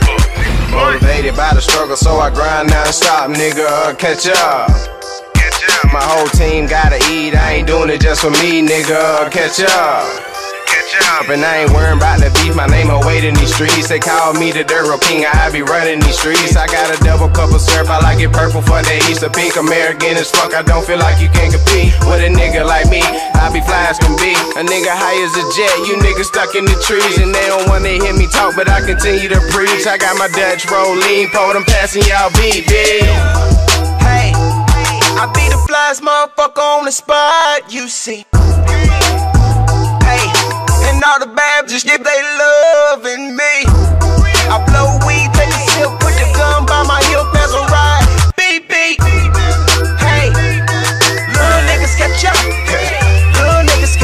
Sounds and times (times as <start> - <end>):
Rhythm and blues: 0.0 - 35.9, 38.4 - 41.1, 43.6 - 54.0.